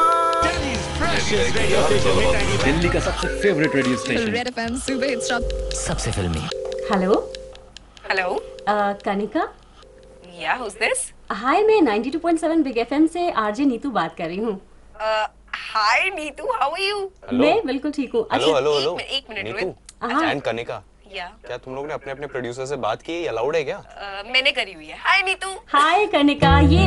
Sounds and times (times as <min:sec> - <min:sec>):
Music: 0:00.0 - 0:06.5, 0:26.4 - 0:26.8.